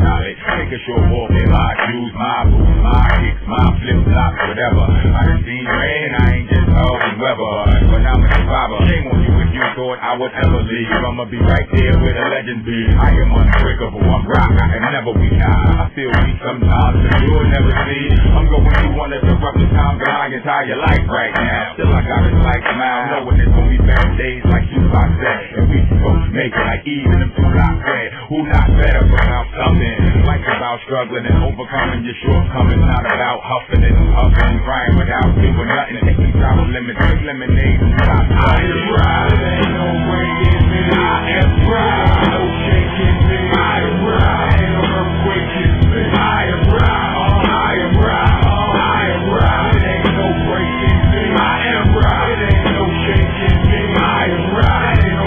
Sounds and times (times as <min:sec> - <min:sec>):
Music: 0:00.0 - 0:55.2.